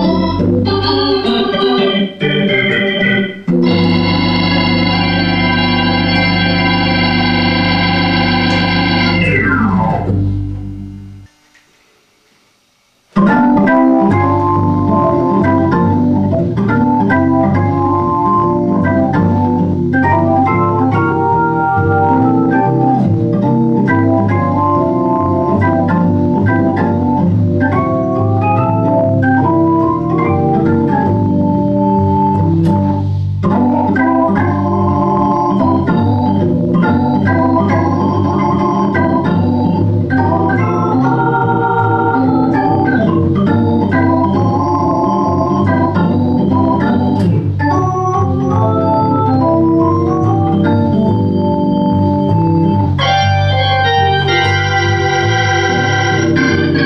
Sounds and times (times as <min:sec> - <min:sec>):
Electronic organ: 0:00.0 - 0:11.3, 0:13.1 - 0:56.8.